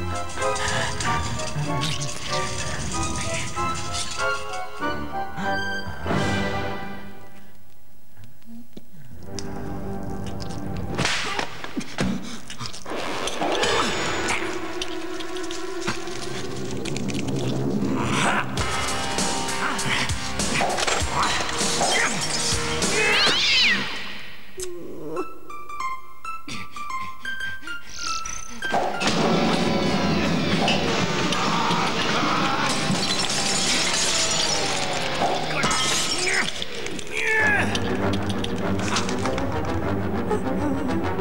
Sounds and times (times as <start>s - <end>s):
Music: 0.0s - 41.2s.